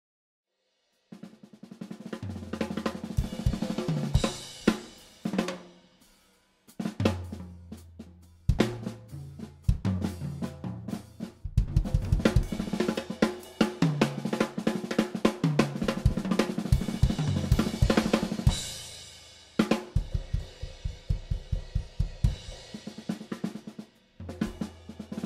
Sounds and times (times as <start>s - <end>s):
Drum kit: 1.1s - 25.2s
Drum roll: 1.2s - 5.8s, 6.7s - 7.6s, 8.5s - 25.2s
Bass drum: 2.3s - 5.0s, 6.9s - 14.2s, 15.6s - 19.0s, 19.9s - 22.8s.